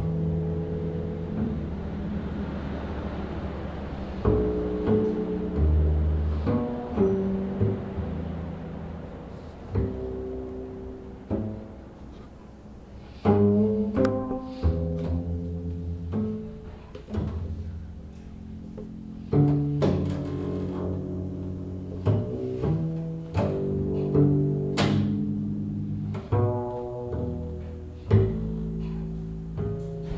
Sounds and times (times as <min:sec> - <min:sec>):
Pizzicato: 0:00.0 - 0:30.1.